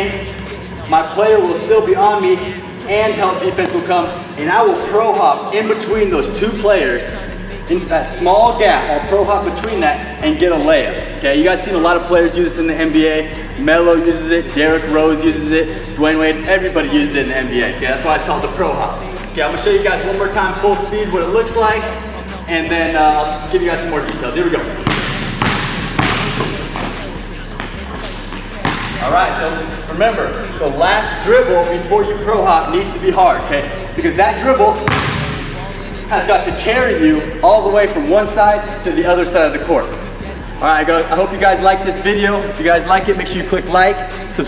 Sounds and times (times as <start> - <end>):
Speech: 0.0 - 25.0, 29.0 - 35.1, 36.0 - 44.4
Music: 0.0 - 44.4
Basketball bounce: 24.8 - 29.1, 34.8 - 35.6.